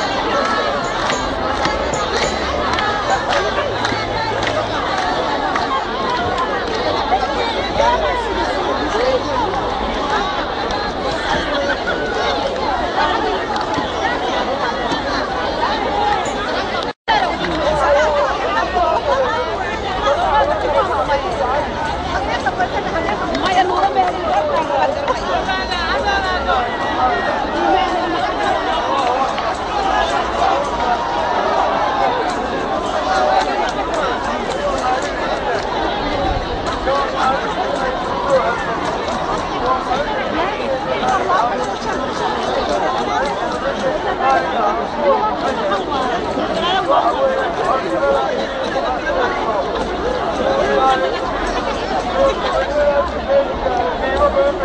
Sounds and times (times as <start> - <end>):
Outside, urban or manmade: 0.0 - 54.6
Speech: 0.0 - 54.6.